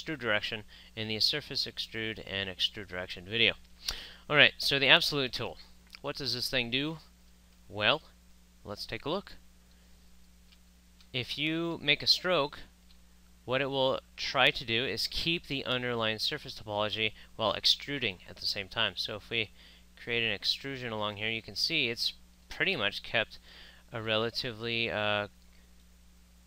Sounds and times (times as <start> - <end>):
Speech: 0.0 - 3.6, 4.3 - 7.1, 7.7 - 9.4, 11.1 - 12.7, 13.5 - 25.4.